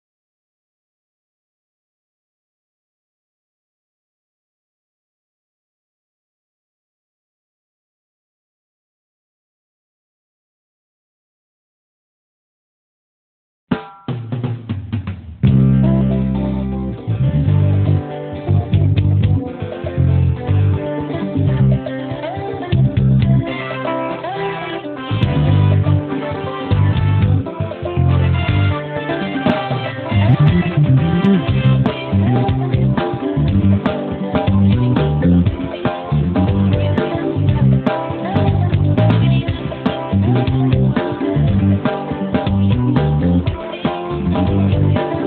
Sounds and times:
Drum: 13.7 - 16.2, 18.7 - 20.7, 22.7 - 23.5, 25.1 - 45.2.

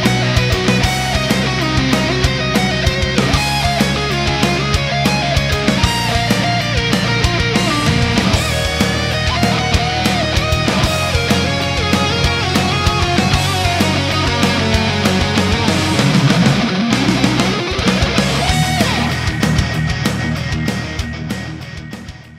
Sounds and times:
Electric guitar: 0.0 - 22.3
Strum: 0.1 - 21.8.

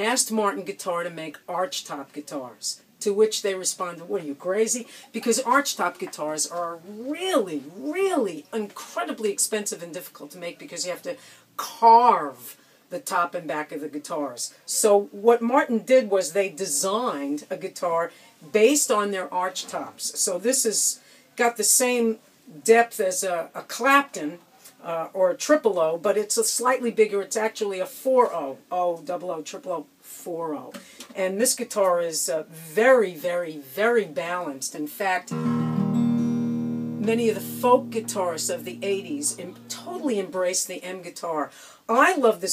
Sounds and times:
Speech: 0.0 - 35.4, 37.0 - 42.5.

